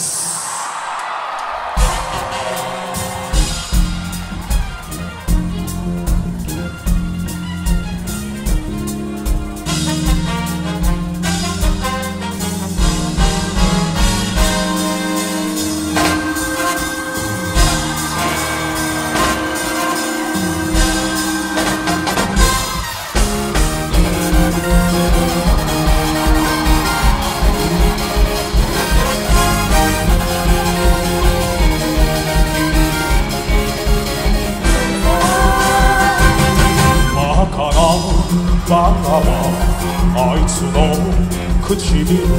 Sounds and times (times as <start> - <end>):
Music: 0.0 - 42.3.